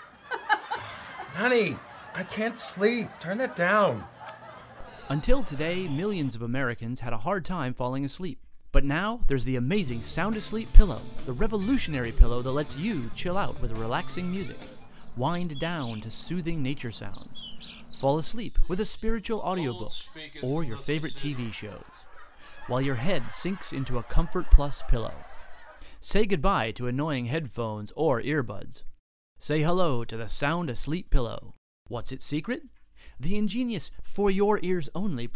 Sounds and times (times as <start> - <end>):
Speech: 1.3 - 4.1, 5.1 - 14.6, 15.2 - 17.3, 18.0 - 21.9, 22.7 - 25.3, 26.0 - 28.8, 29.4 - 35.3.